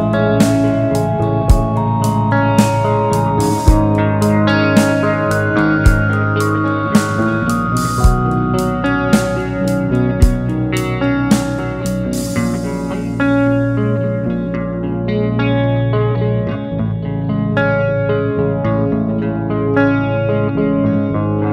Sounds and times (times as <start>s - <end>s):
Music: 0.0s - 21.5s.